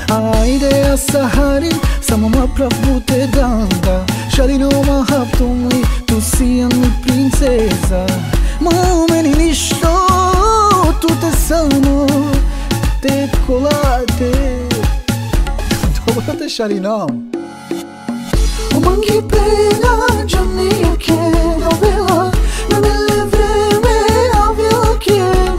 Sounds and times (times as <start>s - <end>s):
Middle Eastern music: 0.0s - 25.5s.